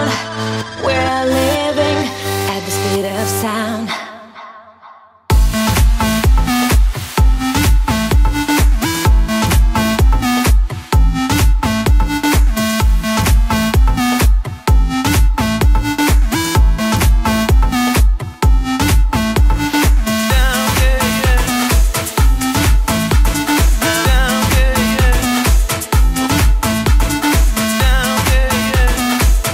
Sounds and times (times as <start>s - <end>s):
Music: 0.0s - 4.4s, 5.2s - 29.5s.